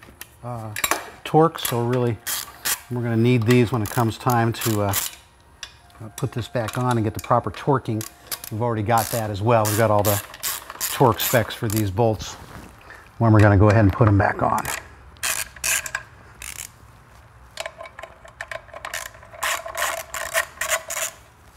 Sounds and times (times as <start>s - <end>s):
Speech: 6.0s - 8.0s, 8.6s - 10.2s, 10.9s - 12.4s, 13.2s - 14.7s.